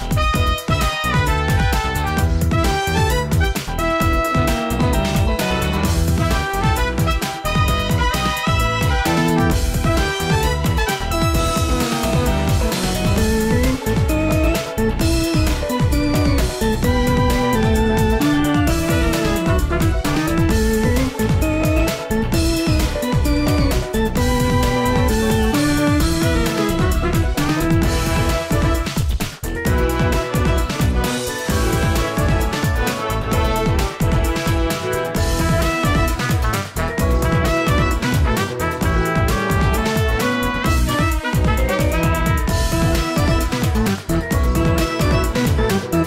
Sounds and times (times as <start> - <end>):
Video game music: 0.0 - 46.0.